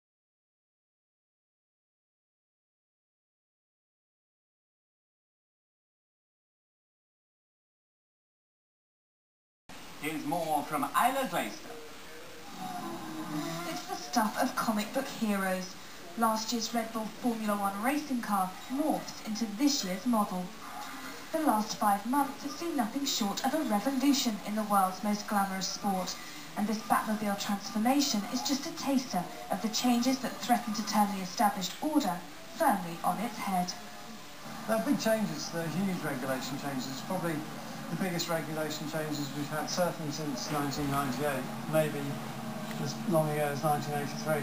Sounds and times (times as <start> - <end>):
Speech: 12.6 - 33.8, 34.7 - 44.4.